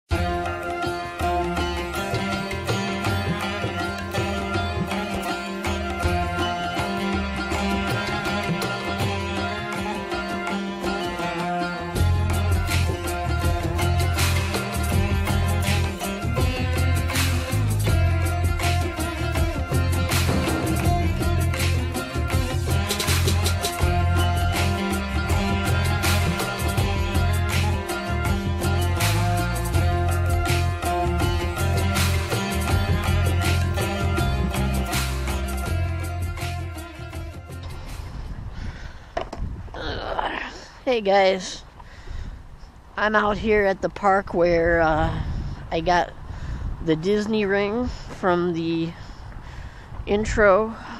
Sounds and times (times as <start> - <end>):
Sitar: 0.0 - 38.3.